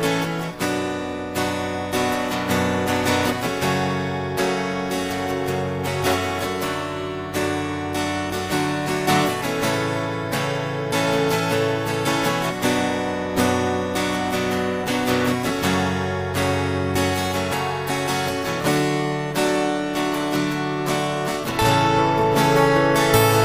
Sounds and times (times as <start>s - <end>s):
Music: 0.0s - 23.4s.